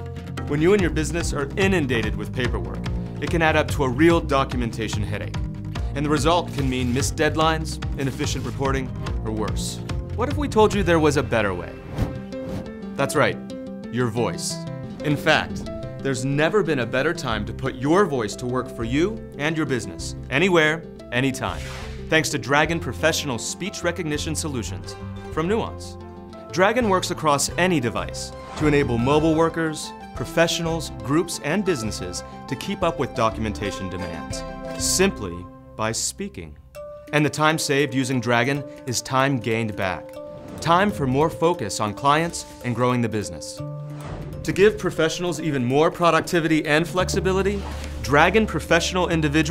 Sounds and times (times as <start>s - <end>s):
Music: 0.0s - 49.5s
Narration, monologue: 0.0s - 49.5s
Male speech, man speaking: 0.5s - 5.4s, 6.0s - 11.8s, 13.0s - 26.0s, 26.6s - 36.6s, 37.2s - 40.0s, 40.6s - 43.6s, 44.5s - 49.5s.